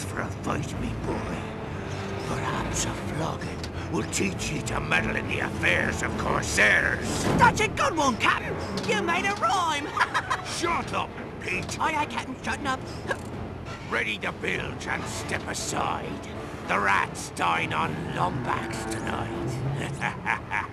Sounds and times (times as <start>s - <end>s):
Speech: 0.0s - 1.5s, 13.9s - 19.6s
Music: 0.0s - 20.7s.